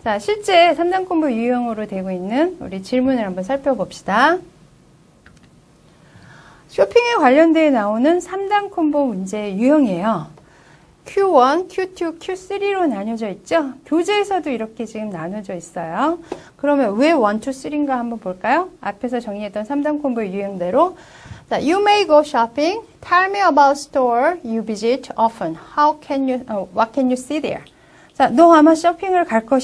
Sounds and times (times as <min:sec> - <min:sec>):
Speech: 0:00.0 - 0:04.5, 0:06.7 - 0:10.4, 0:11.1 - 0:29.6.